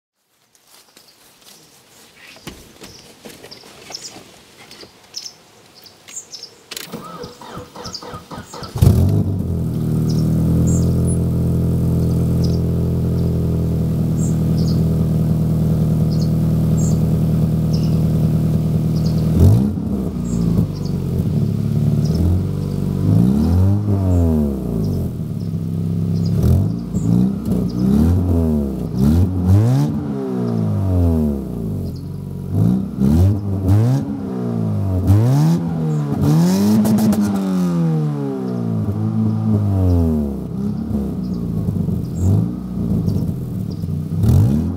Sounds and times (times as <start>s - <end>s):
Car: 6.7s - 44.7s.